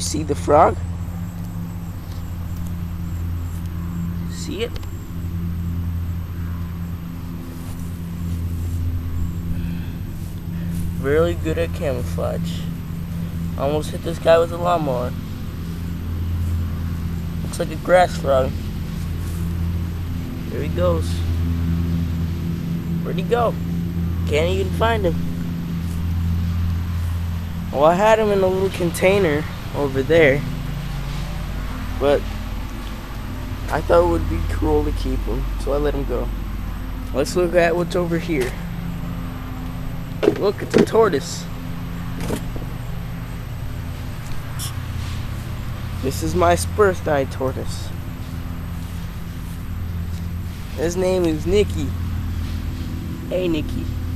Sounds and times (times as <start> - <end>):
Speech: 0.0 - 0.8, 4.2 - 4.8, 11.0 - 12.7, 13.6 - 15.2, 17.4 - 18.6, 20.5 - 21.3, 23.0 - 23.6, 24.2 - 25.2, 27.7 - 30.5, 32.0 - 32.2, 33.7 - 36.4, 37.1 - 38.6, 40.2 - 41.5, 46.0 - 47.9, 50.8 - 52.0, 53.3 - 54.0.